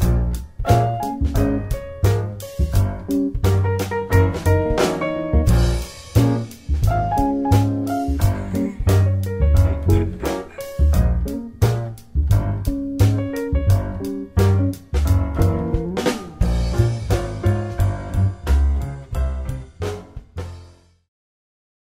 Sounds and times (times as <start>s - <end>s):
Music: 0.0s - 21.1s.